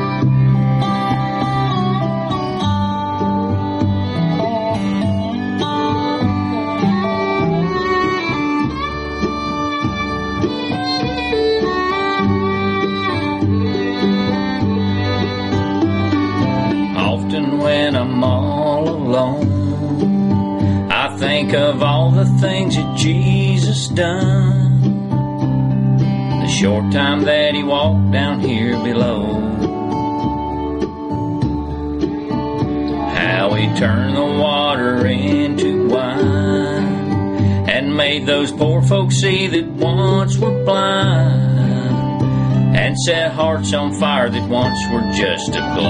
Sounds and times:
Music: 0.0 - 45.8.

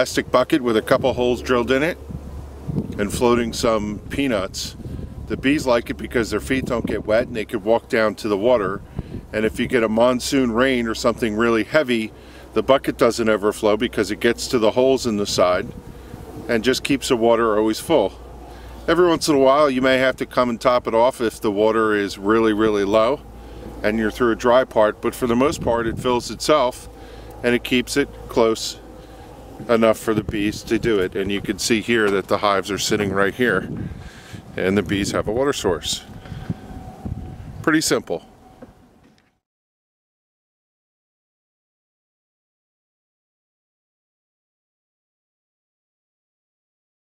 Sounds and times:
Speech: 0.0 - 2.0, 3.0 - 15.7, 16.5 - 18.2, 18.9 - 23.2, 23.8 - 28.8, 29.6 - 33.8, 34.6 - 36.1, 37.6 - 38.3.

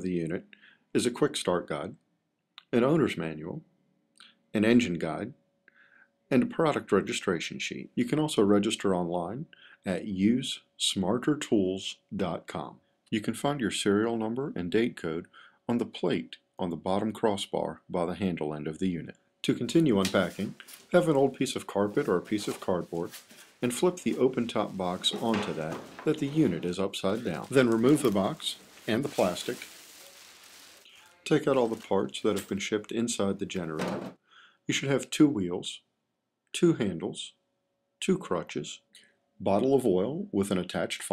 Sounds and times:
Speech: 0.0 - 2.0, 2.6 - 3.7, 4.6 - 5.4, 6.3 - 29.8, 30.9 - 34.0, 34.7 - 35.9, 36.6 - 37.4, 38.0 - 41.1.

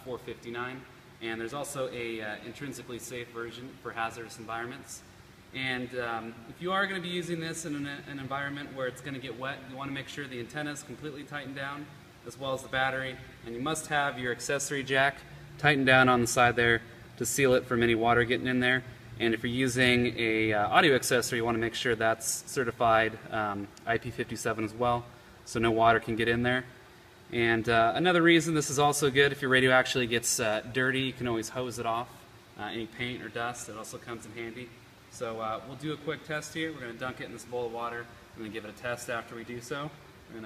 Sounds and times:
Speech: 0.0 - 40.4.

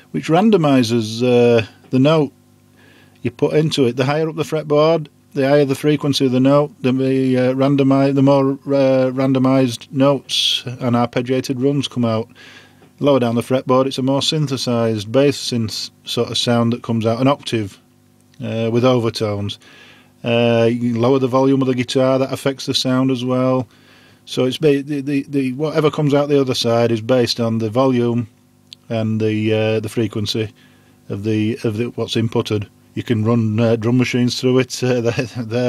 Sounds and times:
Speech: 0.1 - 2.3, 3.2 - 12.3, 13.0 - 17.8, 18.4 - 19.6, 20.2 - 23.7, 24.3 - 30.5, 31.1 - 35.6.

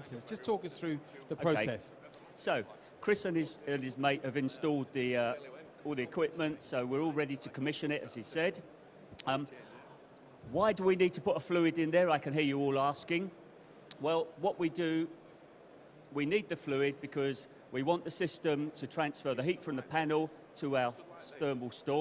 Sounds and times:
Speech: 0.0 - 9.7, 10.5 - 13.4, 14.0 - 15.2, 16.1 - 22.0.

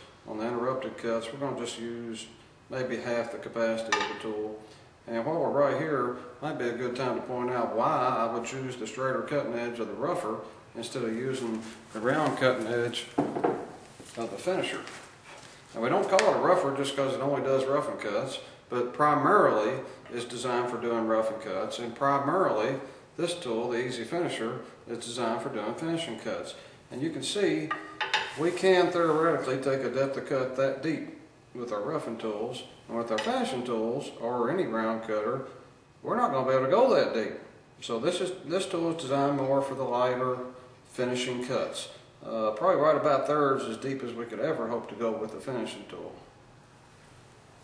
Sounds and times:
Speech: 0.3 - 13.2, 14.2 - 15.0, 15.7 - 27.7, 28.4 - 46.3.

